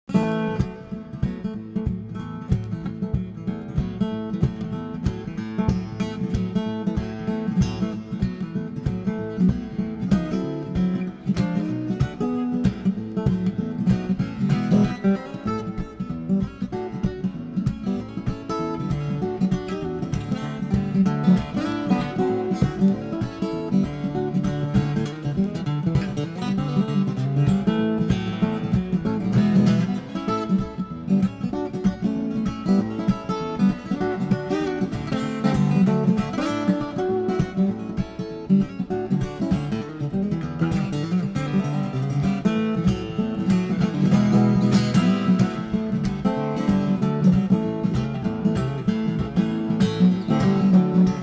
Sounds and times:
Music: 0.0 - 51.2.

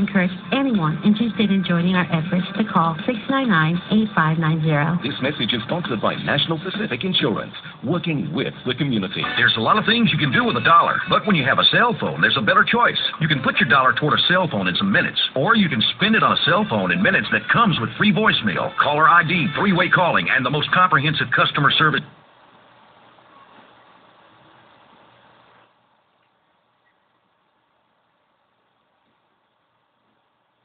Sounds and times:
Music: 0.0 - 7.5, 9.0 - 22.0
Radio: 0.0 - 22.2
Speech: 0.0 - 22.2.

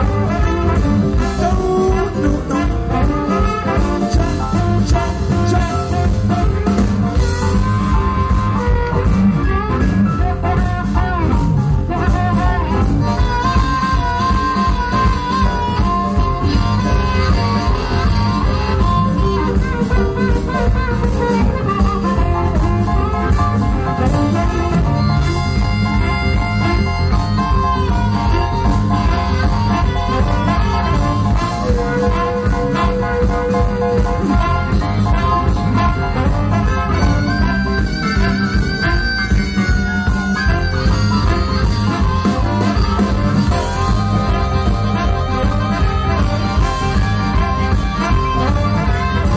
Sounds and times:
Blues: 0.0 - 49.3.

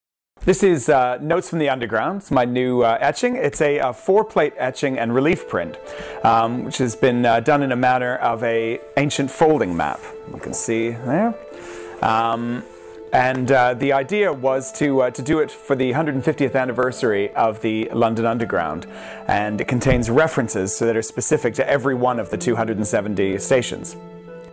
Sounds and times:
Speech: 0.4 - 11.4, 12.0 - 24.0
Music: 0.4 - 24.5.

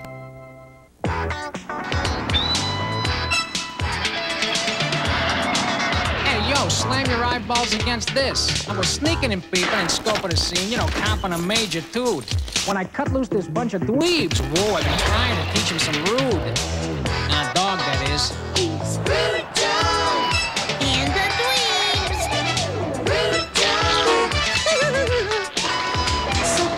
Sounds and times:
Music: 0.0 - 26.7.

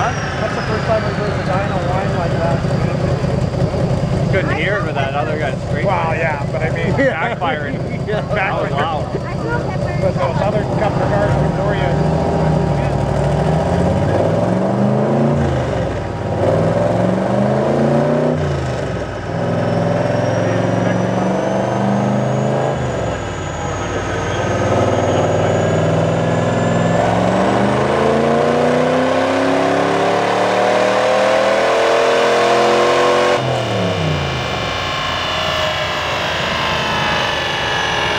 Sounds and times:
Speech: 0.0 - 3.5, 4.2 - 13.0, 20.4 - 21.6, 23.6 - 25.7
Race car, auto racing: 0.0 - 38.1.

